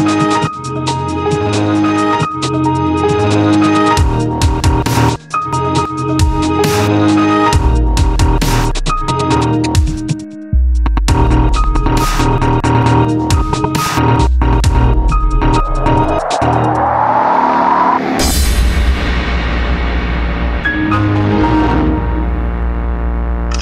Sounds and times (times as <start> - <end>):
Dubstep: 13.7 - 18.7.